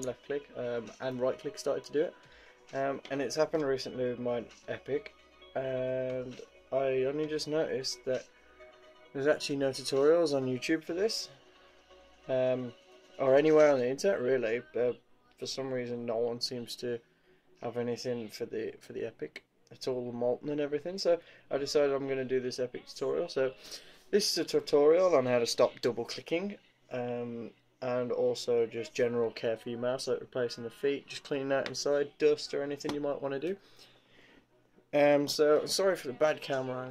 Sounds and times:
Speech: 0:00.0 - 0:08.3, 0:09.2 - 0:11.3, 0:12.3 - 0:17.0, 0:17.6 - 0:33.6, 0:35.0 - 0:36.9.

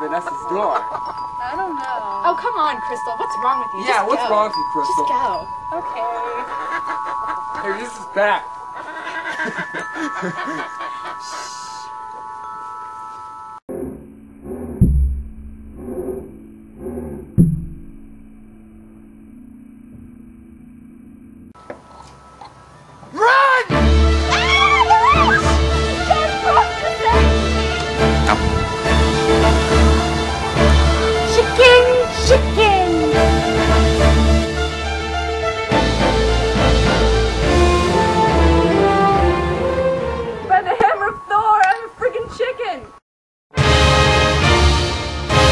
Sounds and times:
Music: 0:00.0 - 0:13.6, 0:23.6 - 0:41.7, 0:43.5 - 0:45.5.

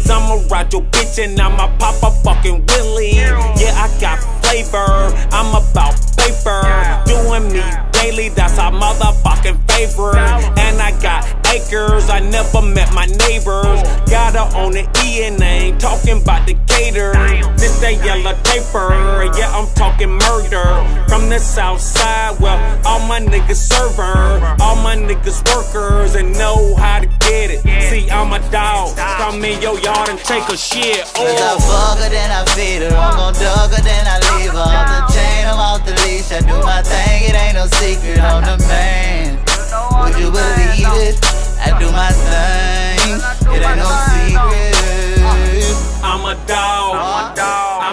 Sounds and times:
Music: 0:00.0 - 0:47.9.

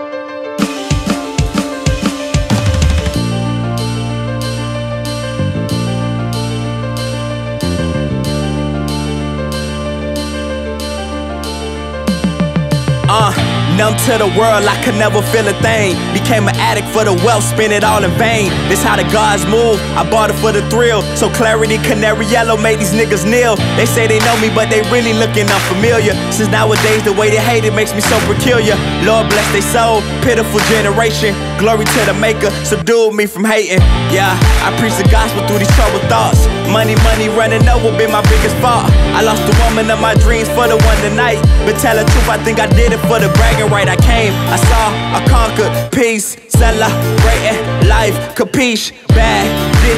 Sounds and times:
Blues: 0:00.5 - 0:49.9.

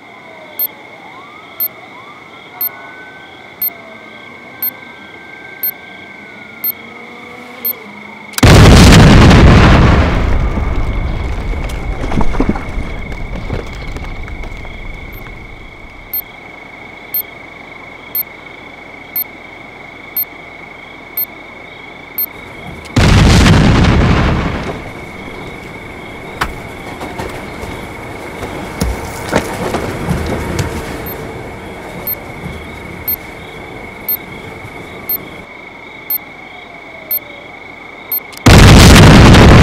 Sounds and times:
Boom: 0:08.4 - 0:12.6, 0:23.0 - 0:24.8, 0:38.4 - 0:39.6.

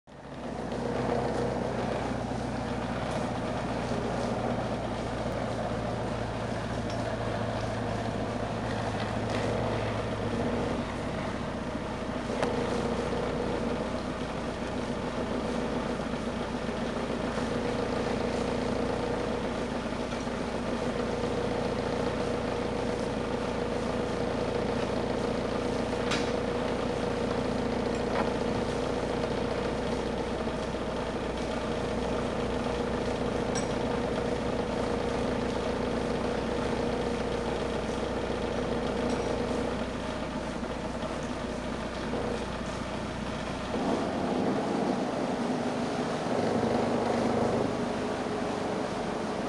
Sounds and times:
Motorboat, speedboat: 0:00.1 - 0:49.4.

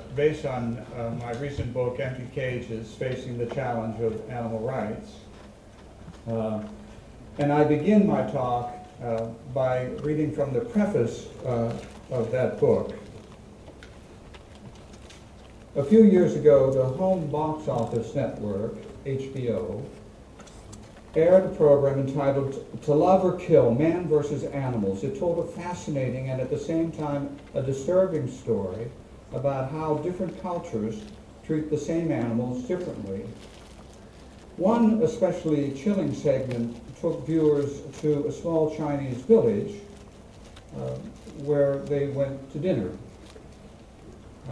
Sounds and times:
Male speech, man speaking: 0:00.0 - 0:05.3, 0:06.3 - 0:06.8, 0:07.4 - 0:13.1, 0:15.8 - 0:20.0, 0:21.2 - 0:33.4, 0:34.6 - 0:39.9, 0:40.7 - 0:43.0
Narration, monologue: 0:00.0 - 0:44.5.

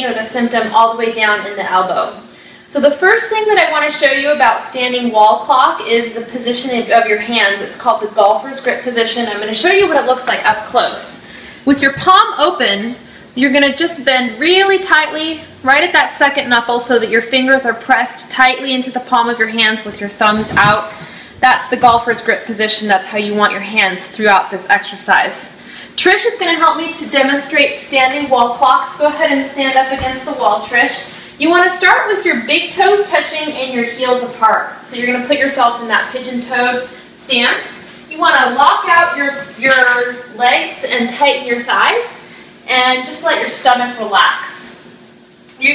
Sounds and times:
Speech: 0:00.0 - 0:44.8, 0:45.5 - 0:45.7.

